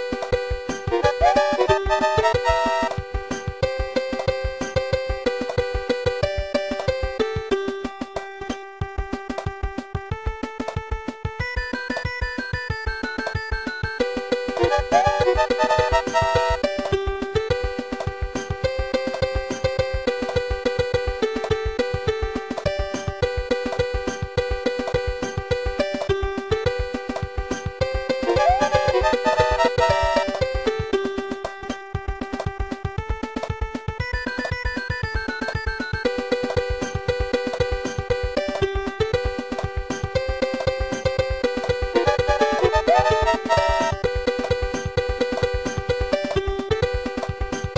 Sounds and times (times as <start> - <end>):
Music: 0.0 - 47.7.